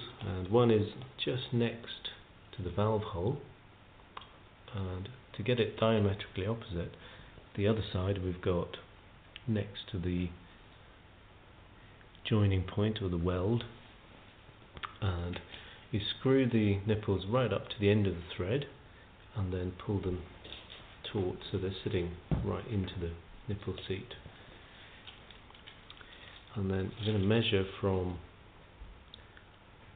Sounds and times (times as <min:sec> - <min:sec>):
Speech: 0:00.0 - 0:03.5, 0:04.7 - 0:10.4, 0:12.2 - 0:13.8, 0:14.8 - 0:20.3, 0:21.0 - 0:24.2, 0:26.5 - 0:28.3.